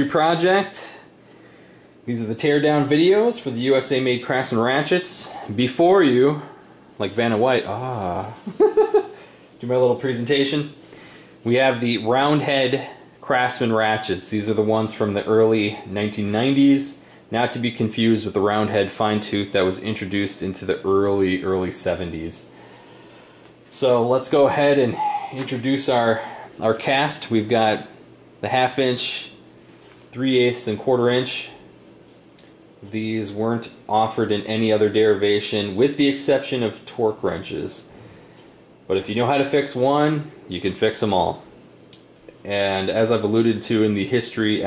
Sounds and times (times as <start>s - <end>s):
Speech: 0.0s - 1.1s, 2.1s - 8.5s, 9.6s - 10.8s, 11.4s - 22.5s, 23.7s - 29.4s, 30.1s - 31.6s, 32.8s - 37.9s, 38.9s - 41.5s, 42.4s - 44.6s.